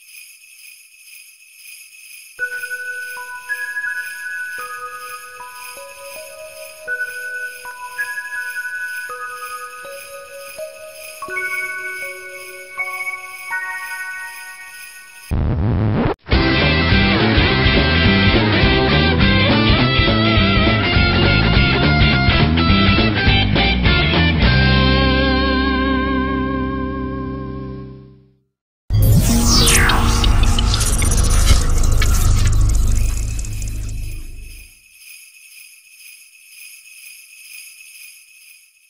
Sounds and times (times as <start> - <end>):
Jingle bell: 0.0 - 15.4, 29.1 - 38.9.